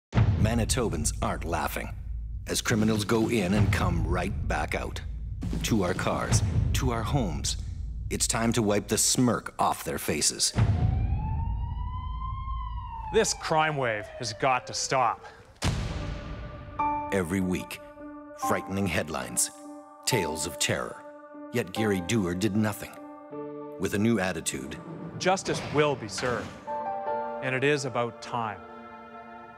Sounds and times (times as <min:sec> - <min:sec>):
Music: 0:00.1 - 0:09.2, 0:15.7 - 0:29.5
Speech: 0:00.4 - 0:01.9, 0:02.5 - 0:05.0, 0:05.6 - 0:10.6, 0:13.1 - 0:15.3, 0:17.2 - 0:17.8, 0:18.4 - 0:19.5, 0:21.6 - 0:23.0, 0:23.8 - 0:26.5, 0:27.4 - 0:28.6.